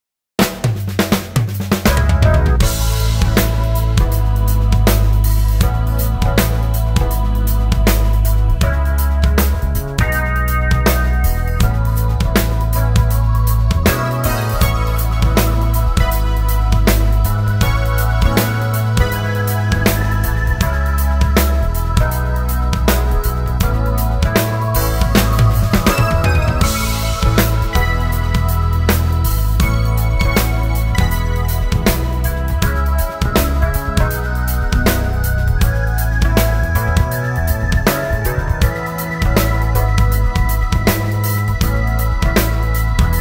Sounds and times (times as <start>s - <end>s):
Music: 0.4s - 43.2s.